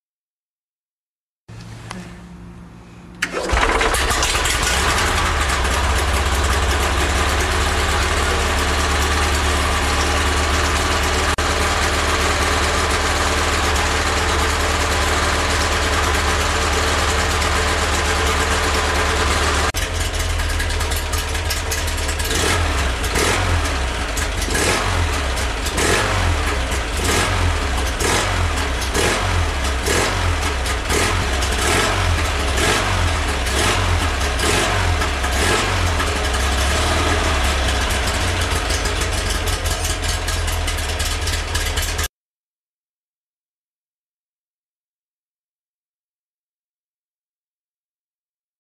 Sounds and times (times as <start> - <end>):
Idling: 1.5 - 42.1.